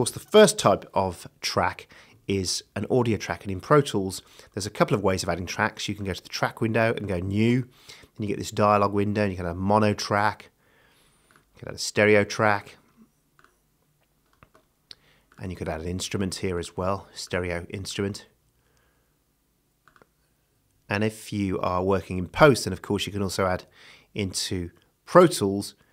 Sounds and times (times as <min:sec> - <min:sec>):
Speech: 0:00.0 - 0:10.6, 0:11.6 - 0:12.8, 0:15.4 - 0:18.4, 0:20.9 - 0:25.8.